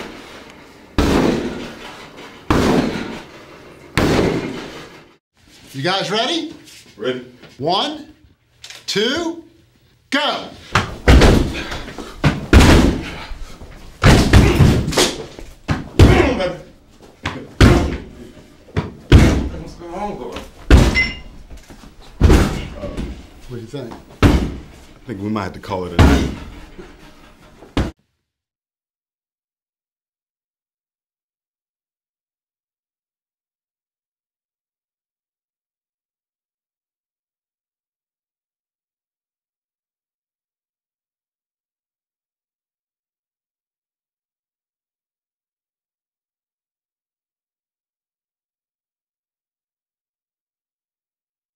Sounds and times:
Speech: 5.7 - 8.2, 8.9 - 10.6, 16.0 - 16.7, 19.5 - 20.5, 22.8 - 24.0, 25.0 - 26.4.

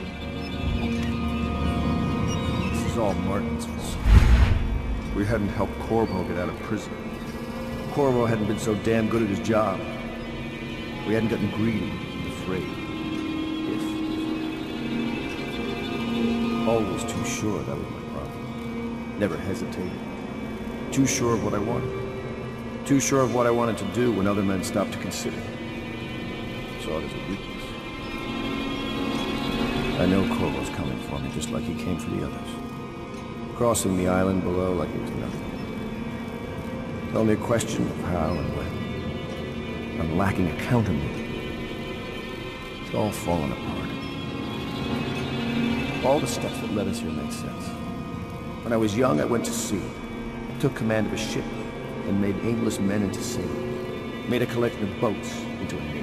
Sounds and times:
Music: 0.0 - 56.0
Narration, monologue: 2.5 - 14.4, 15.0 - 56.0.

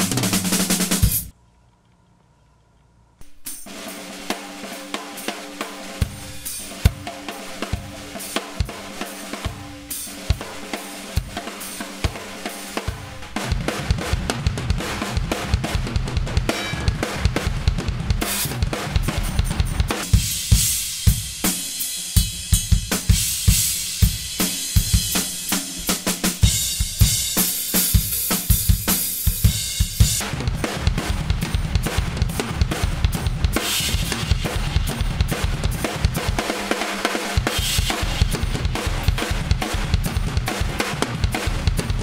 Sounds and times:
Drum roll: 0.0 - 1.3, 3.2 - 42.0
Drum kit: 0.0 - 1.4, 3.2 - 42.0
Rimshot: 10.1 - 21.9, 22.7 - 42.0
Bass drum: 12.9 - 21.4, 22.3 - 42.0.

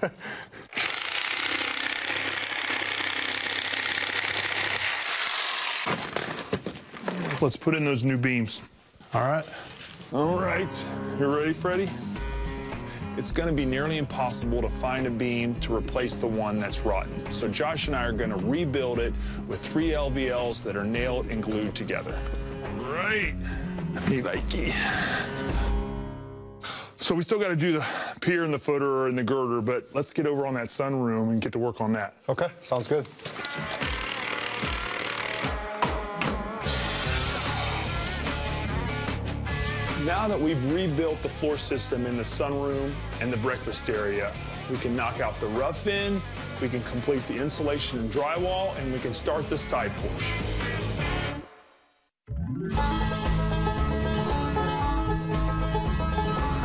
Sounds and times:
Jackhammer: 0.7 - 6.1, 33.7 - 35.6.

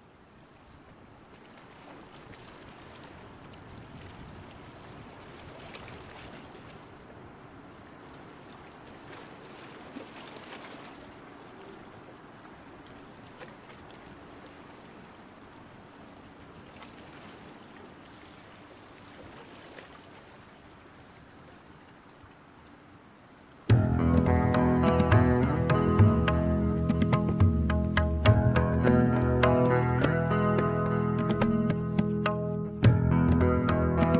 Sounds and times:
Music: 23.7 - 34.1.

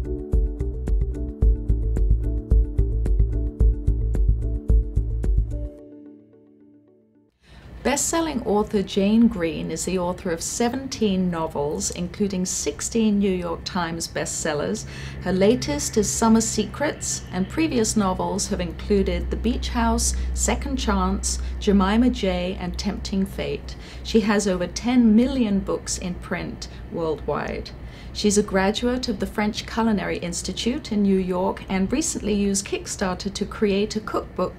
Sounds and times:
Speech: 7.9 - 34.5.

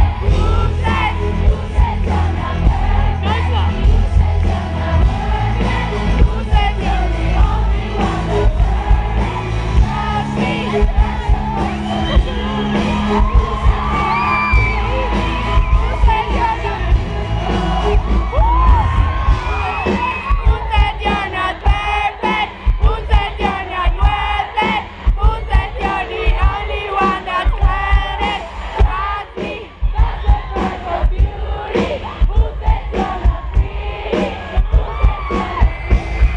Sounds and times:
Female singing: 0.0 - 18.8, 19.7 - 35.8
Music: 0.0 - 36.3.

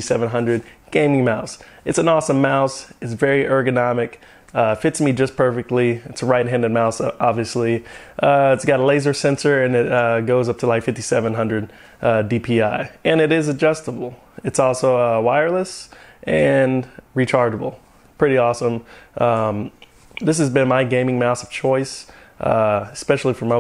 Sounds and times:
Speech: 0.0 - 23.6.

